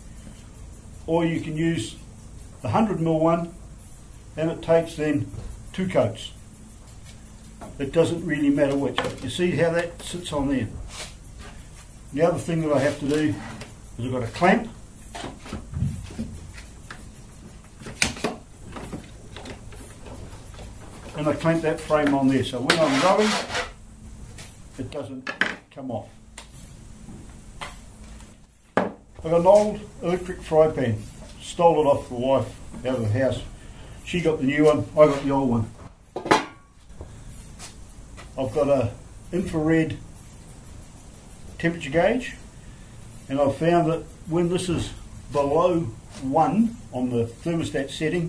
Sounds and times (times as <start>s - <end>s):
Speech: 1.1s - 2.0s, 2.7s - 3.6s, 4.4s - 6.4s, 7.8s - 10.8s, 12.2s - 13.4s, 14.0s - 14.7s, 21.2s - 23.4s, 24.8s - 26.2s, 29.2s - 33.5s, 34.1s - 35.8s, 38.4s - 40.0s, 41.6s - 42.4s, 43.3s - 48.2s.